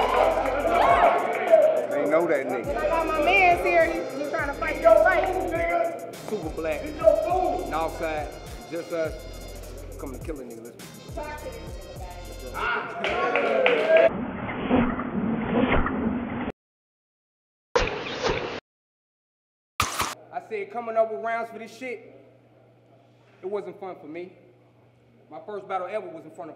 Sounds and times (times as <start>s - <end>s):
Music: 0.0s - 14.1s.